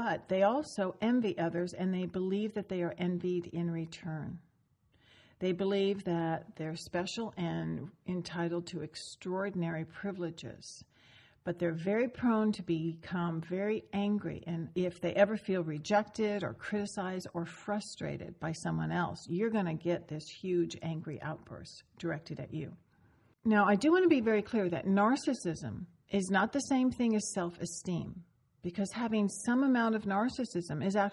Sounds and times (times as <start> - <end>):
Speech: 0.0 - 4.4, 5.4 - 10.9, 11.5 - 22.8, 23.4 - 31.1.